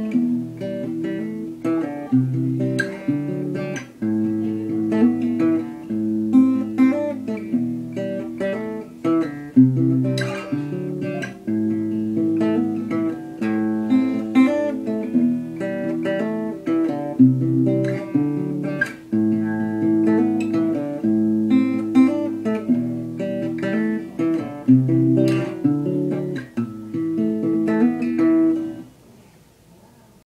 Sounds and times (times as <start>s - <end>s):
Guitar: 0.0s - 30.2s.